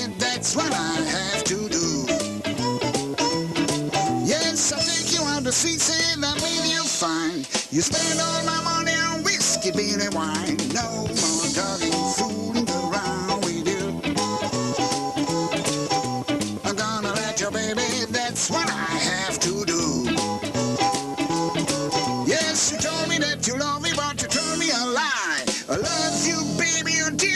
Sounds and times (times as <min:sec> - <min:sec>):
Music: 0:00.0 - 0:27.3.